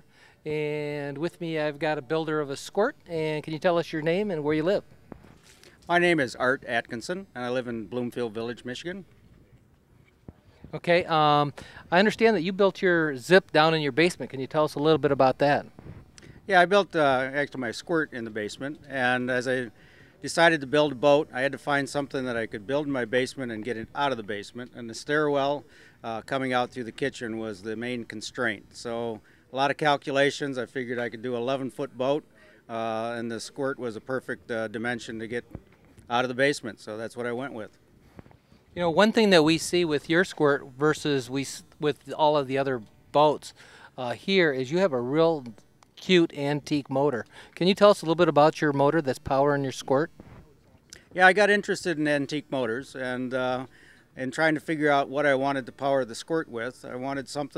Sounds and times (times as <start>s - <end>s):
Speech: 0.4s - 4.9s, 5.9s - 9.1s, 10.7s - 15.7s, 16.5s - 37.8s, 38.8s - 50.1s, 51.2s - 57.5s.